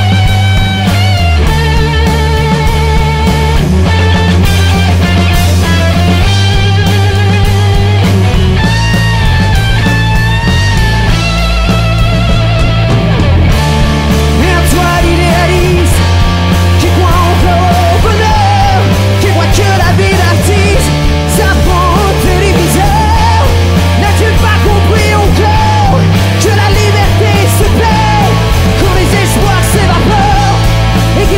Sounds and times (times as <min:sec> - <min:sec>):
Heavy metal: 0:00.0 - 0:31.3.